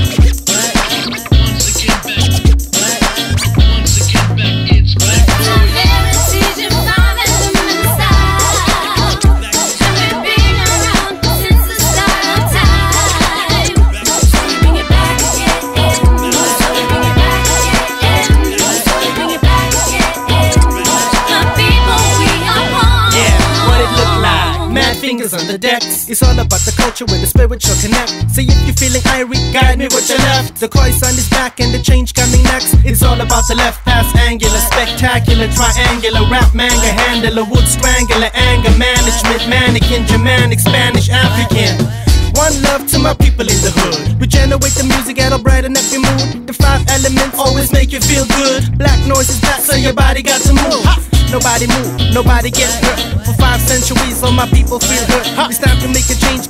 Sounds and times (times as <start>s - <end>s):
Hip hop music: 0.0s - 56.4s
Rapping: 0.0s - 56.4s.